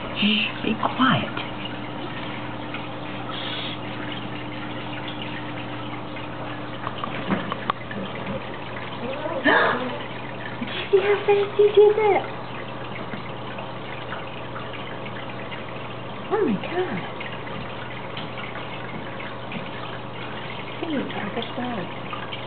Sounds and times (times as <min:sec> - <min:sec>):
Speech: 0:10.8 - 0:12.3, 0:16.3 - 0:17.1, 0:20.8 - 0:21.9.